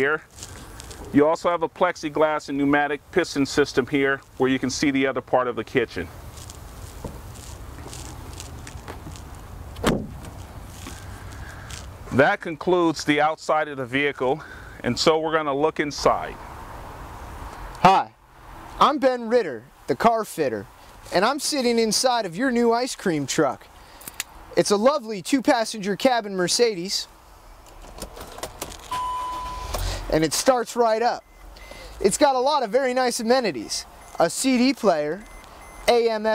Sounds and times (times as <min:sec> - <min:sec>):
Speech: 0:00.0 - 0:00.3, 0:01.1 - 0:06.1, 0:12.1 - 0:16.4, 0:17.8 - 0:18.2, 0:18.8 - 0:23.7, 0:24.6 - 0:27.1, 0:30.1 - 0:31.2, 0:32.0 - 0:35.2, 0:35.8 - 0:36.3
Motor vehicle (road): 0:00.0 - 0:36.3.